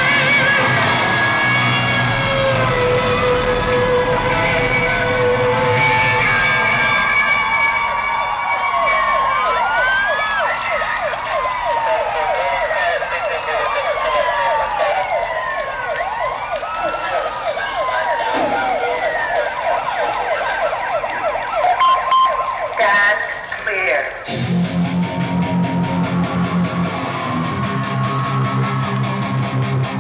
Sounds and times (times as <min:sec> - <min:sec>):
Vehicle: 0:00.0 - 0:30.0.